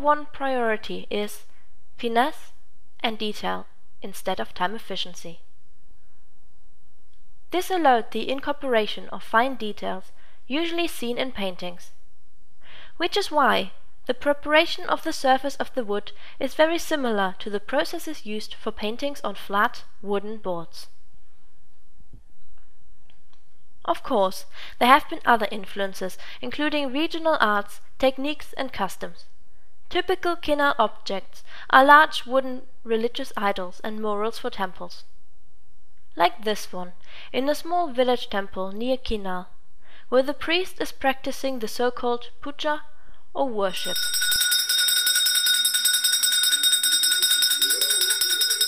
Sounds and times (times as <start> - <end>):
Speech: 0.0 - 5.4, 7.5 - 12.0, 13.0 - 20.9, 23.8 - 29.3, 29.9 - 35.1, 36.2 - 44.0.